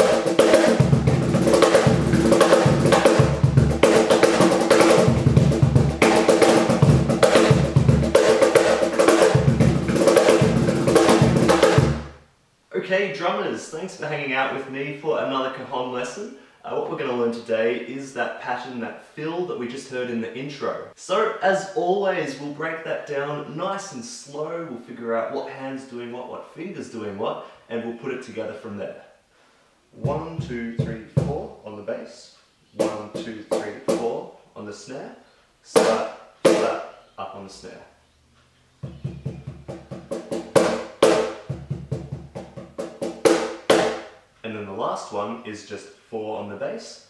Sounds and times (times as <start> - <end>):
Speech: 12.7 - 29.2, 30.0 - 38.0, 44.4 - 47.1.